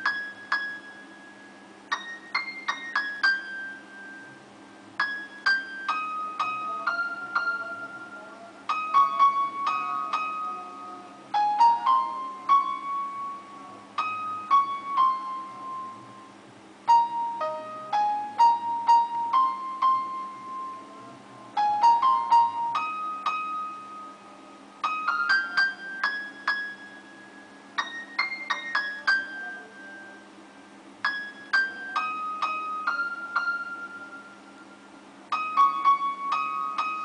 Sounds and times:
Music: 0.0 - 37.0.

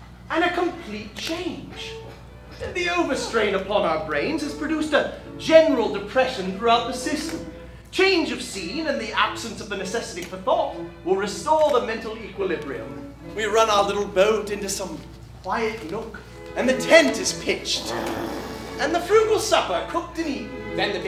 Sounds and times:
Music: 0.0 - 21.0
Speech: 0.3 - 2.0, 2.6 - 21.0.

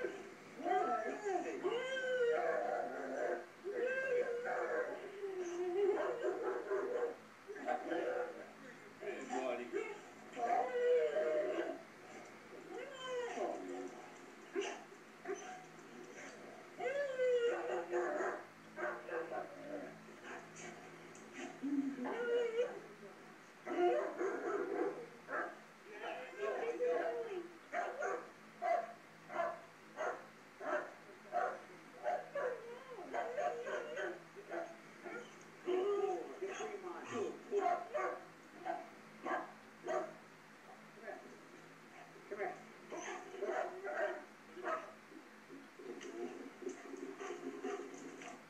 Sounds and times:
Bow-wow: 27.8 - 32.6, 37.6 - 40.2.

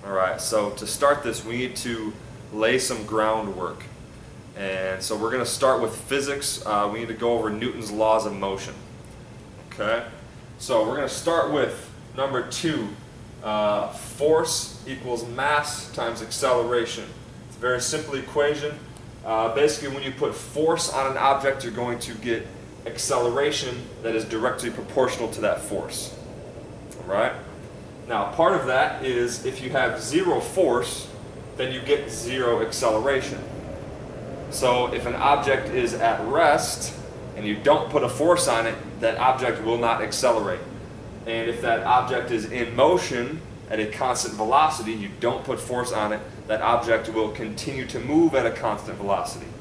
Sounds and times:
Speech: 0.0 - 4.0, 4.6 - 8.8, 9.7 - 26.2, 27.0 - 27.4, 28.1 - 33.5, 34.5 - 49.6.

